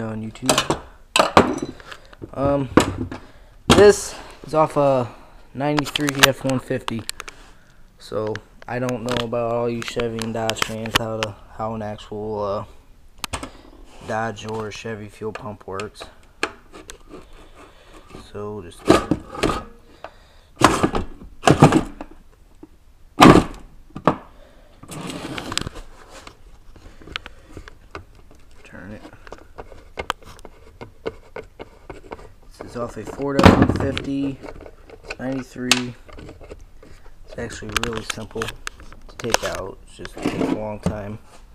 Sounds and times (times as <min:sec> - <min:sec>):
Speech: 0:00.0 - 0:00.7, 0:02.3 - 0:02.8, 0:03.7 - 0:07.1, 0:08.0 - 0:12.8, 0:14.0 - 0:16.2, 0:18.2 - 0:19.1, 0:28.6 - 0:29.2, 0:32.5 - 0:34.4, 0:35.2 - 0:36.0, 0:37.3 - 0:38.6, 0:39.2 - 0:41.2.